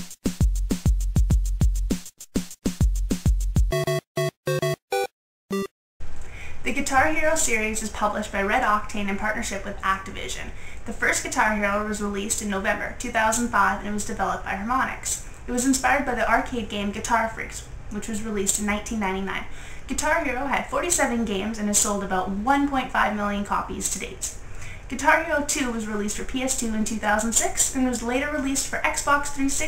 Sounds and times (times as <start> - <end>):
Speech: 6.6 - 29.6.